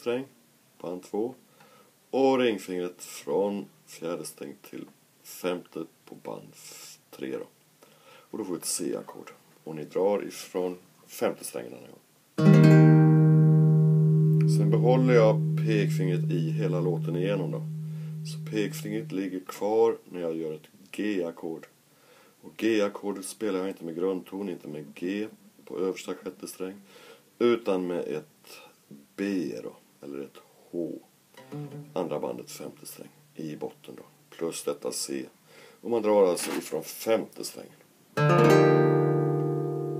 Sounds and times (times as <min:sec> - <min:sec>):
Speech: 0:00.0 - 0:01.4, 0:02.1 - 0:07.6, 0:08.3 - 0:12.0, 0:14.5 - 0:17.7, 0:18.3 - 0:21.8, 0:22.4 - 0:26.8, 0:27.4 - 0:31.1, 0:32.0 - 0:37.8
Acoustic guitar: 0:12.4 - 0:19.2, 0:31.4 - 0:32.6, 0:38.2 - 0:40.0
Independent music: 0:12.4 - 0:19.2, 0:31.4 - 0:32.1, 0:38.2 - 0:40.0.